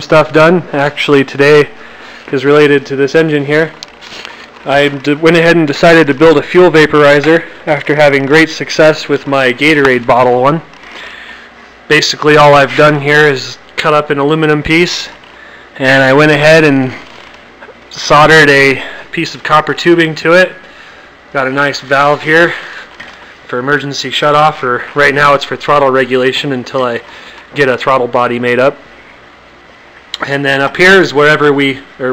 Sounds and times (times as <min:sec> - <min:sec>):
Speech: 0:00.0 - 0:03.8, 0:04.6 - 0:10.7, 0:11.9 - 0:15.2, 0:15.8 - 0:17.0, 0:17.9 - 0:20.6, 0:21.3 - 0:22.7, 0:23.5 - 0:28.8, 0:30.2 - 0:32.1.